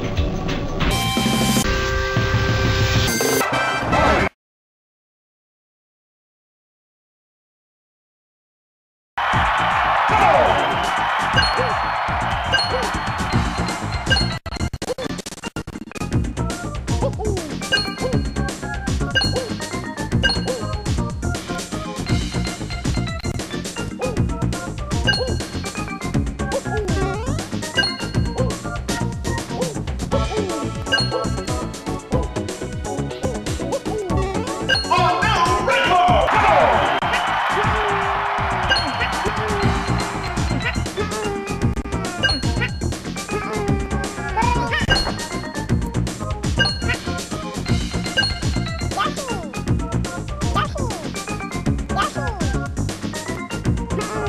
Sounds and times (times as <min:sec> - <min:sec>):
Music: 0:00.0 - 0:04.3, 0:09.2 - 0:54.2.